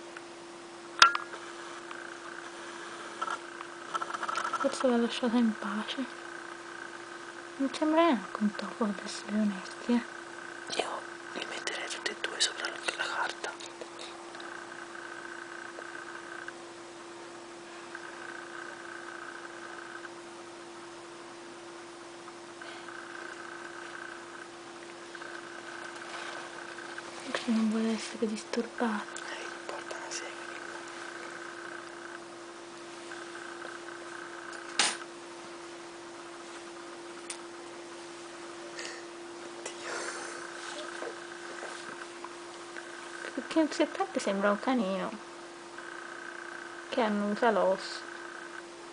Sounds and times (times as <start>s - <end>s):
Speech: 4.6s - 6.2s, 7.6s - 10.1s, 27.2s - 30.5s, 43.3s - 45.2s, 46.9s - 48.1s.